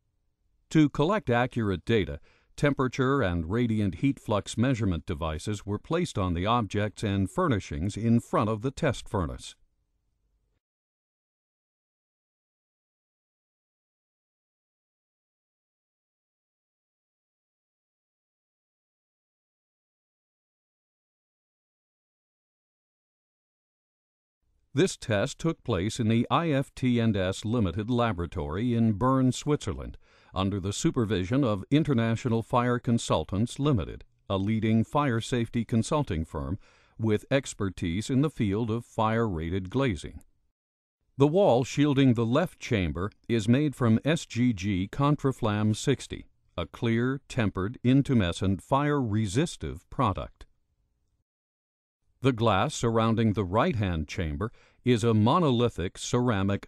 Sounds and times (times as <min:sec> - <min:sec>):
Speech: 0:00.7 - 0:09.6, 0:24.8 - 0:40.2, 0:41.2 - 0:50.5, 0:52.2 - 0:56.6.